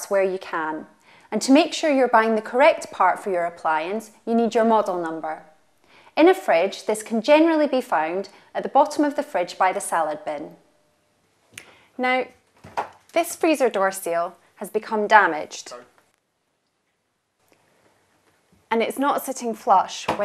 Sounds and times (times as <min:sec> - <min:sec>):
Speech: 0:00.0 - 0:05.5, 0:06.2 - 0:10.6, 0:12.0 - 0:12.4, 0:13.1 - 0:16.0, 0:18.7 - 0:20.2.